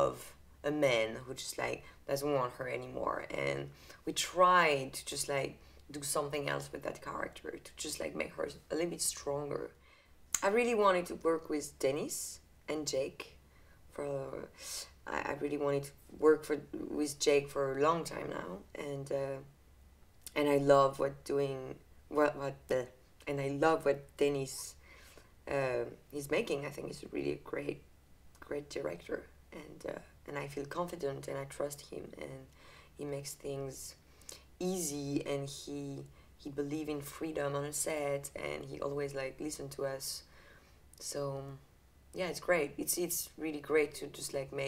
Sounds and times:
Speech: 0.0 - 9.8, 10.4 - 19.5, 20.3 - 24.8, 25.5 - 27.8, 28.4 - 34.0, 34.6 - 40.3, 41.0 - 44.6.

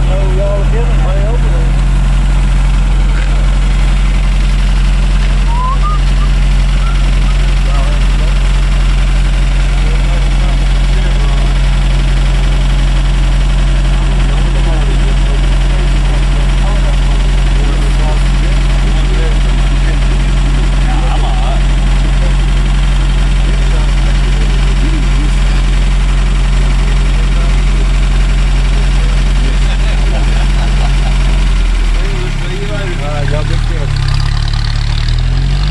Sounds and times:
Speech: 0.0 - 1.8, 7.6 - 8.5, 9.7 - 11.8, 13.8 - 25.8, 26.6 - 31.0, 31.9 - 34.0.

